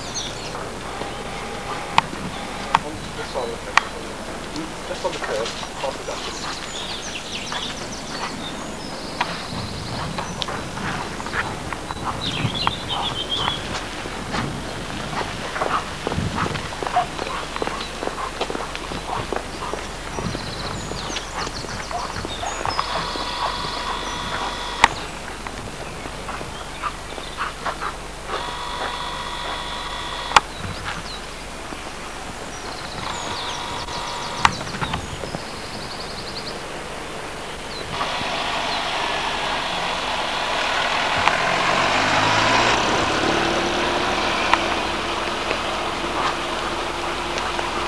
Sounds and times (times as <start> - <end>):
Walk, footsteps: 15.2 - 20.4
Dog: 15.2 - 24.8.